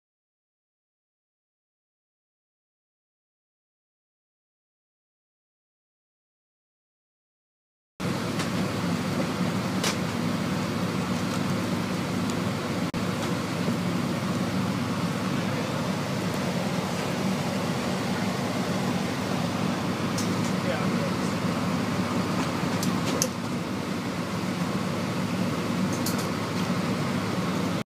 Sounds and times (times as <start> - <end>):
Air conditioning: 8.0 - 27.8
Speech: 15.2 - 15.9, 20.5 - 21.4.